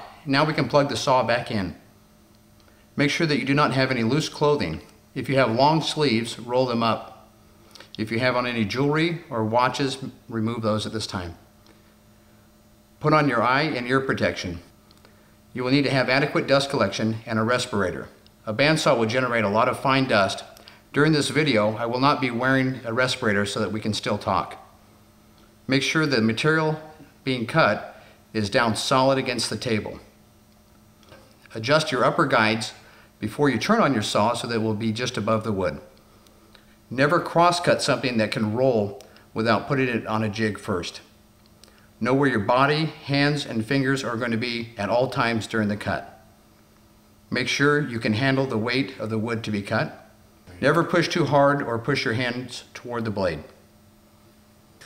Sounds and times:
Speech: 0:00.0 - 0:01.8, 0:03.0 - 0:07.3, 0:08.0 - 0:11.5, 0:13.0 - 0:14.7, 0:15.6 - 0:24.7, 0:25.7 - 0:30.2, 0:31.5 - 0:35.9, 0:36.9 - 0:41.1, 0:42.0 - 0:46.2, 0:47.3 - 0:53.6.

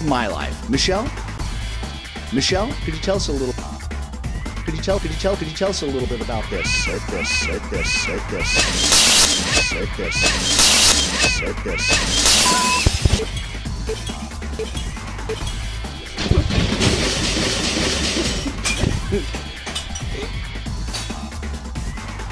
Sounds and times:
Music: 0:00.0 - 0:22.3.

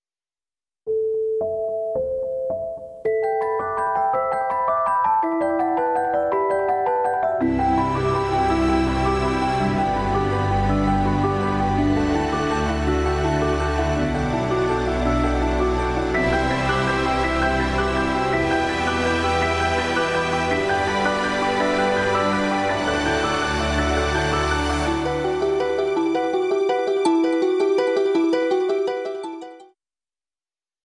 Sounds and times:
Music: 0:00.9 - 0:29.8.

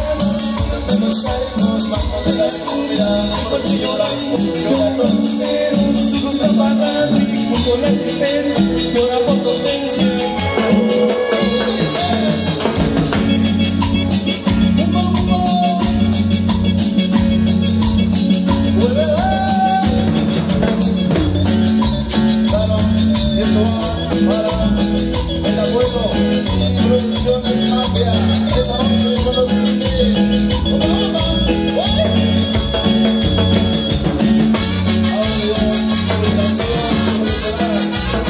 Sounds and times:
Music of Latin America: 0:00.0 - 0:38.3.

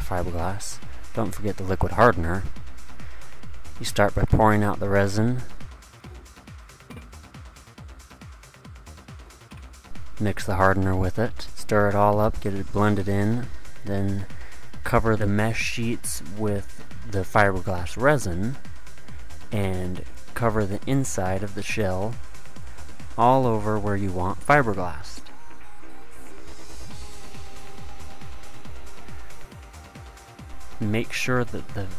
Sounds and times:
Speech: 0:00.0 - 0:02.5, 0:03.8 - 0:05.6, 0:10.2 - 0:18.6, 0:19.5 - 0:22.2, 0:23.2 - 0:25.3, 0:30.8 - 0:31.9
Music: 0:00.0 - 0:31.9.

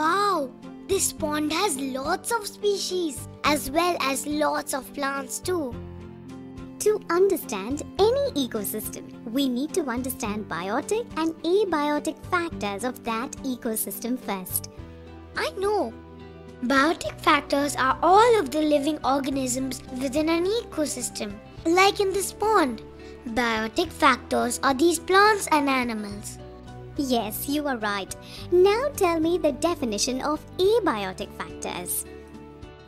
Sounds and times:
Child speech, kid speaking: 0:00.0 - 0:05.8, 0:06.8 - 0:14.7, 0:15.4 - 0:16.0, 0:16.6 - 0:26.4, 0:27.0 - 0:32.1
Music for children: 0:00.0 - 0:32.8.

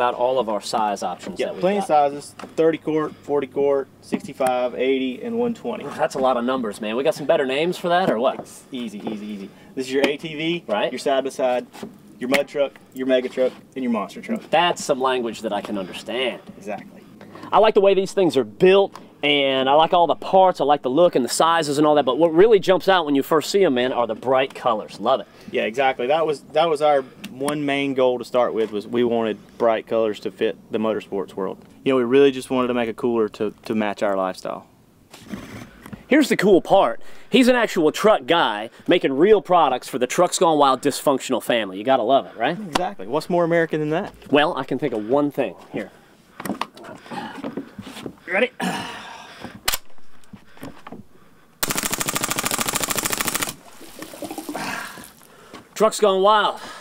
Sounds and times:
Speech: 0:00.0 - 0:34.7, 0:36.1 - 0:46.0, 0:55.8 - 0:56.6.

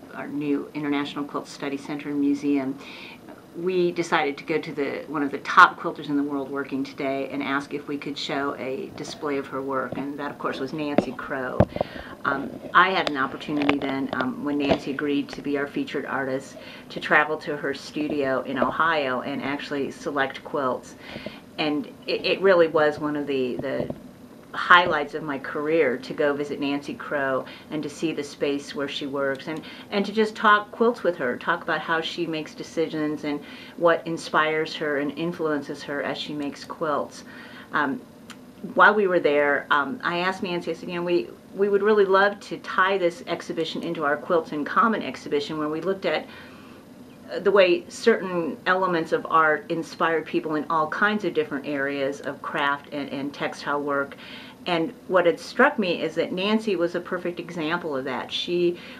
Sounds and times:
Speech: 0:00.0 - 0:21.0, 0:21.6 - 0:38.0, 0:38.6 - 0:46.3, 0:47.3 - 0:58.9.

